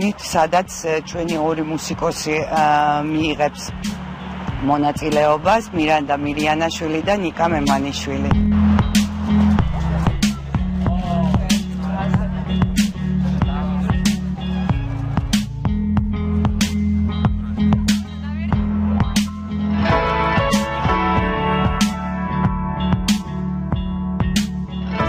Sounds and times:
Speech: 0:00.0 - 0:03.7, 0:04.6 - 0:08.4
Music: 0:00.0 - 0:25.0.

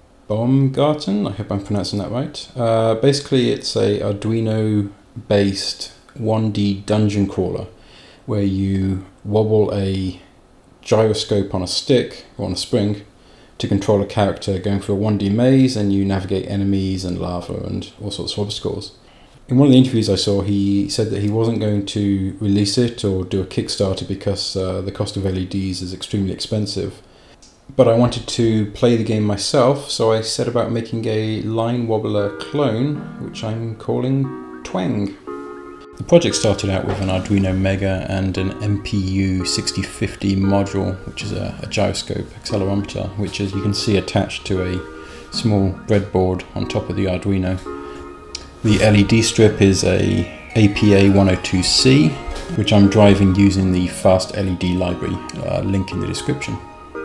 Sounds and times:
Speech: 0:00.3 - 0:27.0, 0:27.7 - 0:35.2, 0:36.0 - 0:47.7, 0:48.6 - 0:56.6
Music: 0:32.0 - 0:57.0.

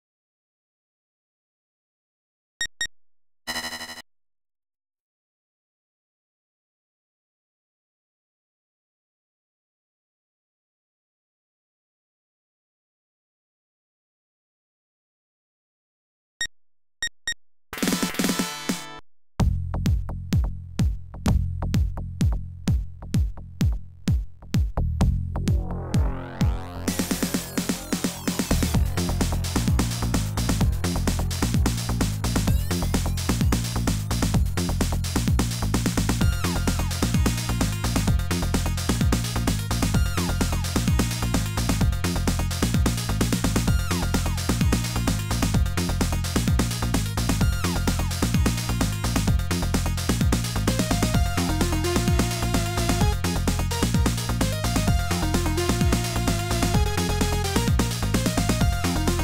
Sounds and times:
Soundtrack music: 0:25.1 - 0:59.2.

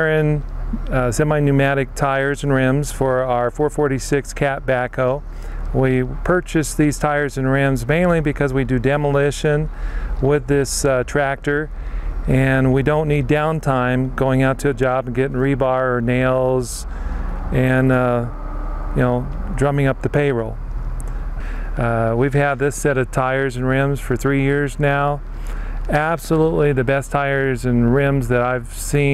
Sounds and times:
Speech: 0:00.0 - 0:16.9, 0:17.5 - 0:18.4, 0:19.0 - 0:20.6, 0:21.8 - 0:25.2, 0:25.9 - 0:29.1.

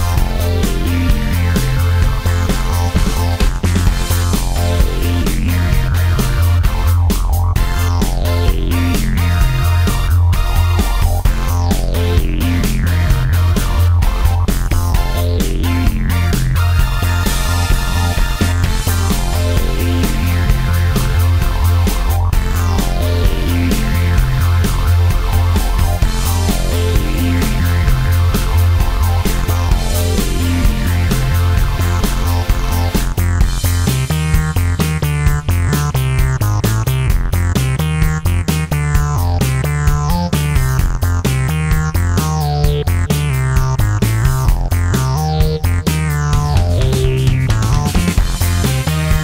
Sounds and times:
Music: 0:00.0 - 0:49.2.

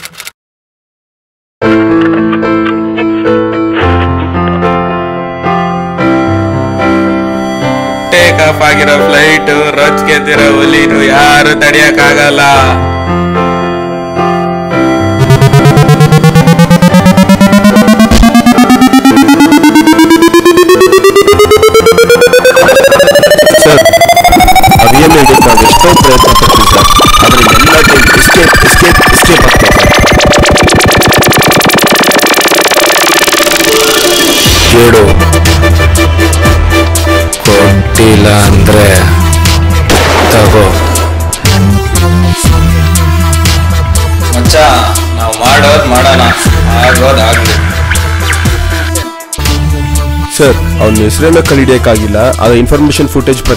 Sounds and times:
Music: 0:01.6 - 0:53.5
Speech: 0:08.1 - 0:12.8, 0:34.7 - 0:35.2, 0:37.5 - 0:39.1, 0:40.4 - 0:40.8, 0:44.4 - 0:47.5, 0:50.3 - 0:53.5
Gunshot, gunfire: 0:39.9 - 0:41.0.

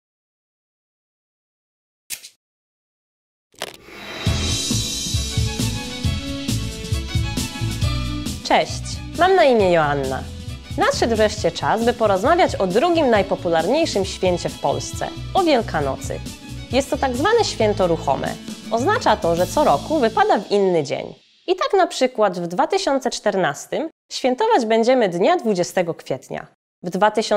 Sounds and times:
Music: 0:03.8 - 0:23.0
Speech: 0:08.4 - 0:27.3.

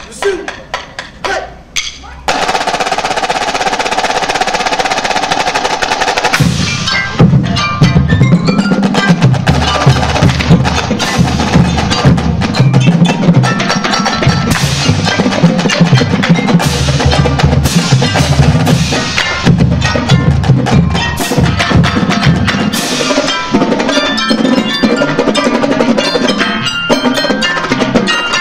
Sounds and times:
Percussion: 0:00.0 - 0:28.4.

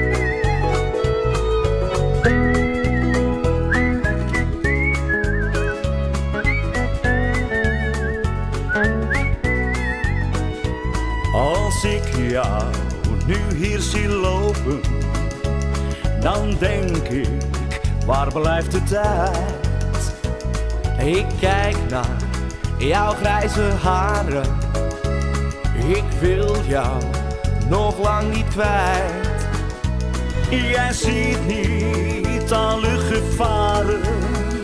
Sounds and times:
Music: 0:00.0 - 0:34.6.

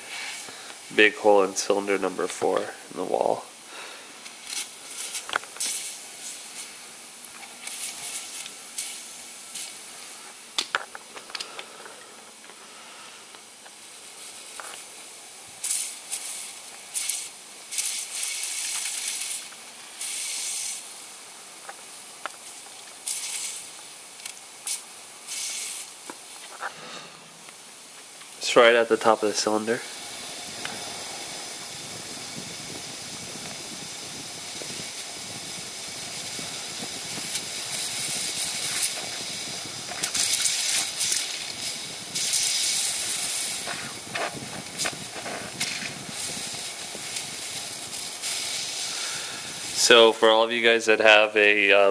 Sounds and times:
Speech: 0:00.9 - 0:03.5, 0:28.4 - 0:29.9, 0:49.8 - 0:51.9.

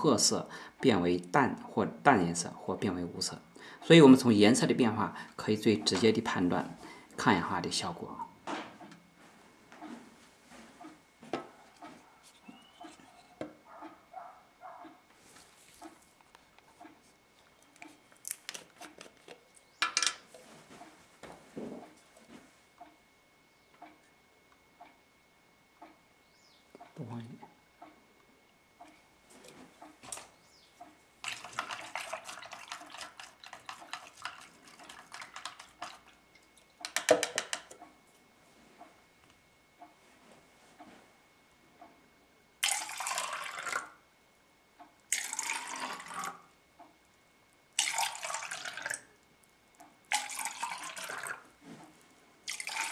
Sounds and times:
Liquid: 0:31.2 - 0:37.1, 0:42.6 - 0:44.0, 0:45.1 - 0:46.5, 0:47.8 - 0:51.5, 0:52.5 - 0:52.9.

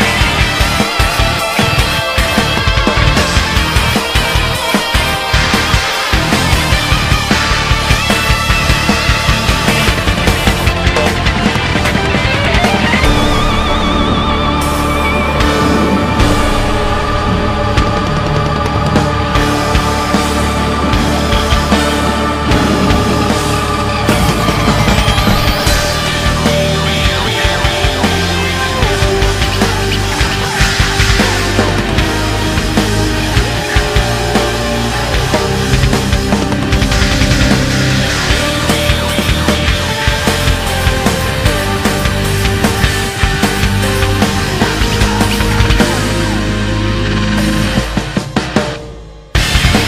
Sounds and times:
Angry music: 0:00.0 - 0:49.8
Soundtrack music: 0:00.0 - 0:49.8.

